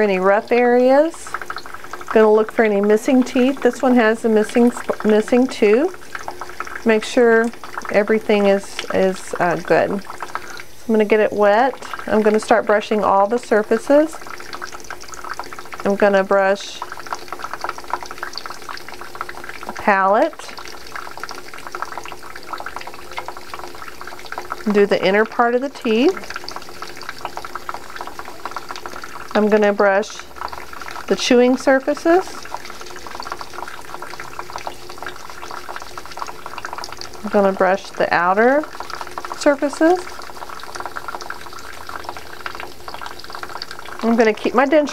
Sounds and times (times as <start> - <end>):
Water: 0.0 - 44.9
Water tap, faucet: 0.0 - 44.9.